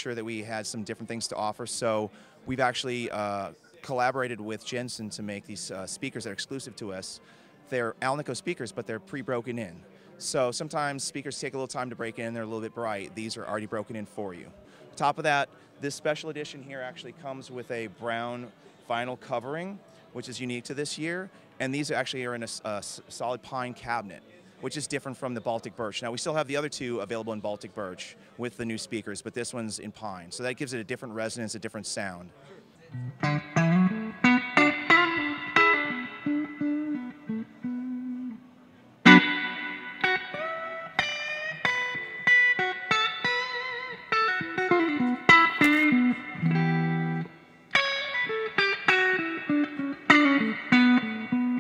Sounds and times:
Speech: 0.0 - 33.0.

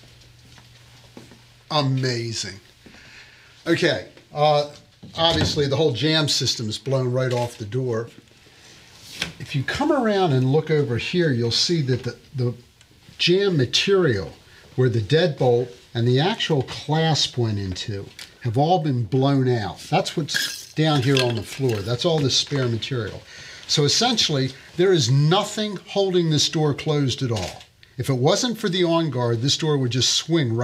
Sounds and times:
Speech: 1.7 - 2.7, 3.6 - 8.2, 9.4 - 12.6, 13.2 - 30.6.

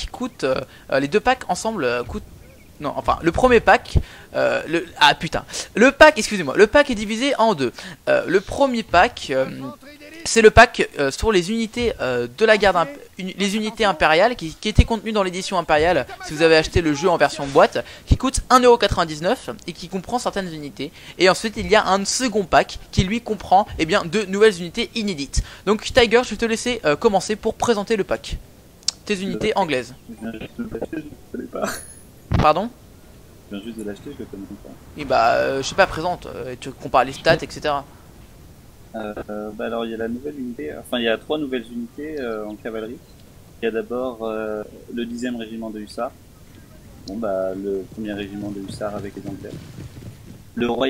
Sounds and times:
Speech: 2.8 - 31.8, 33.5 - 37.8, 39.0 - 43.0, 43.6 - 46.1, 46.7 - 49.6, 50.6 - 50.8.

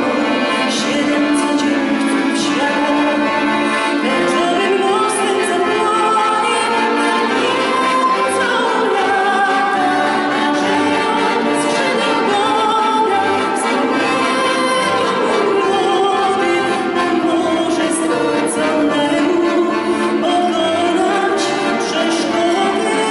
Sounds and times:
Accordion: 0.0 - 23.1.

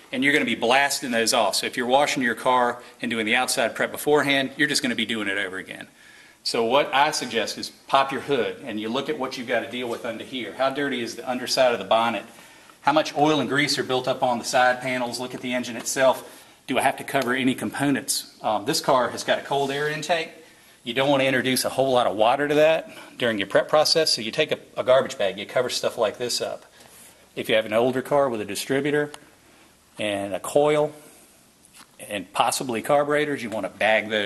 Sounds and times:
Speech: 0.0 - 26.7, 27.4 - 29.2, 30.0 - 31.1, 32.0 - 34.2.

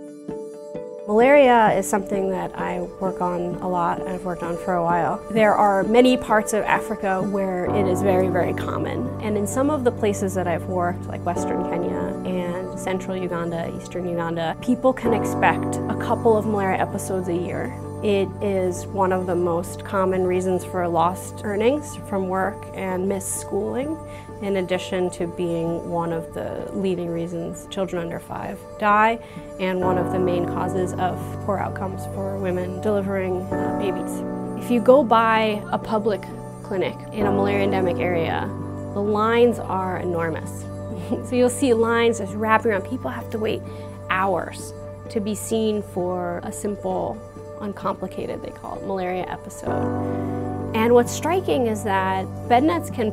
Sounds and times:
Music: 0.0 - 53.1
Speech: 1.1 - 49.8, 50.8 - 53.1.

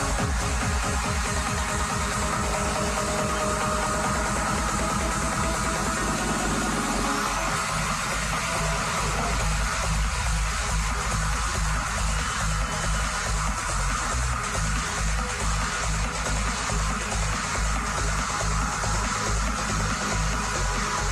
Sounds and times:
Electronic music: 0.0 - 21.1.

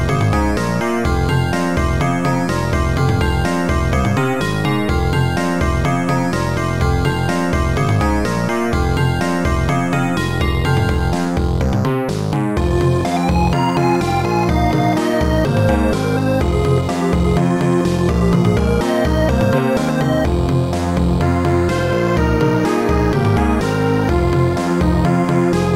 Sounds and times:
Video game music: 0.0 - 25.7.

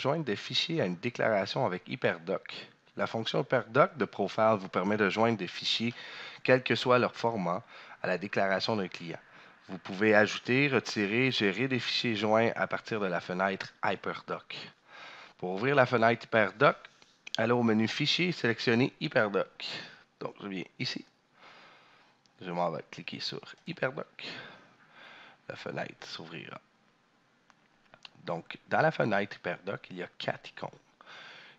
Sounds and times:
Speech: 0.0 - 14.8, 15.4 - 21.0, 22.4 - 24.5, 25.5 - 26.6, 28.1 - 30.8.

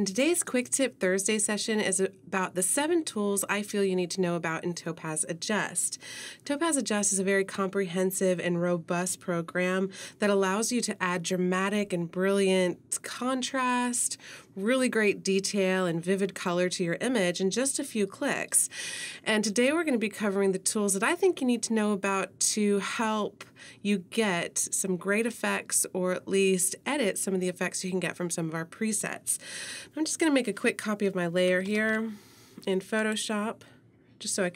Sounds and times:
Speech: 0.0 - 33.6, 34.2 - 34.5.

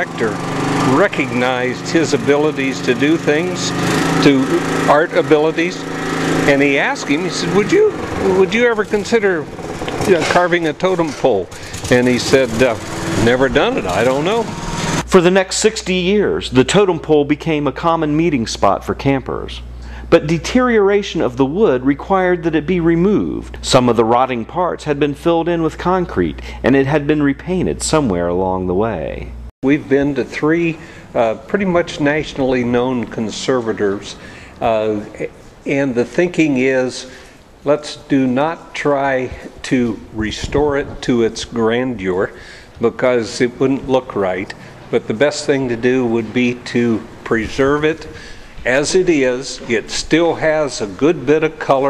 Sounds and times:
Speech: 0.0 - 14.5, 15.1 - 51.9.

